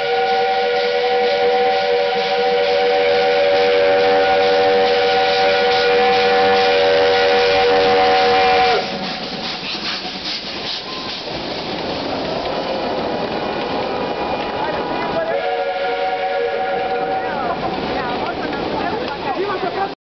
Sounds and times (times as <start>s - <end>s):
Speech: 17.1s - 20.0s.